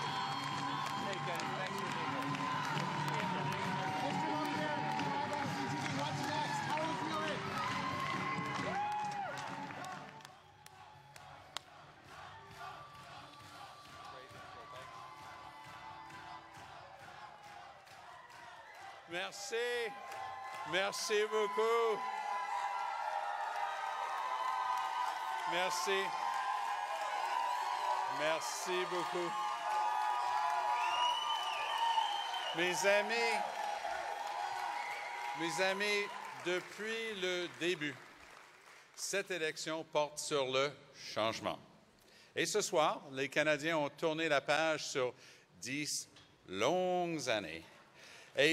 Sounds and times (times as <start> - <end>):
Male speech, man speaking: 1.0 - 1.8, 3.2 - 7.4, 19.1 - 20.0, 20.7 - 22.0, 25.4 - 26.1, 28.1 - 29.4, 32.5 - 33.5, 35.3 - 38.0, 39.0 - 41.7, 42.4 - 47.7.